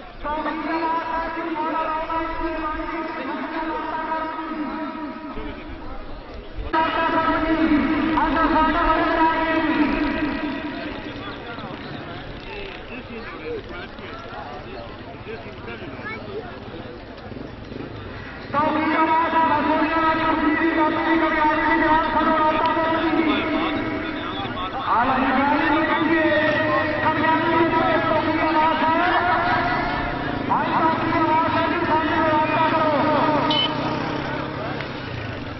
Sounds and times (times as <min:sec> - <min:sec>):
Speech: 0:00.0 - 0:17.4, 0:18.5 - 0:35.6.